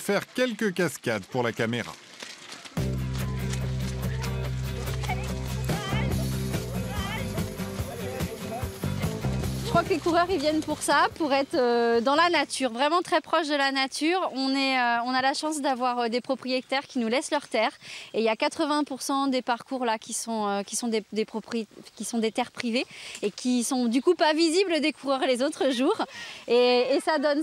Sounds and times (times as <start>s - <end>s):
Outside, rural or natural: 0.0s - 27.4s
Music: 2.8s - 11.6s.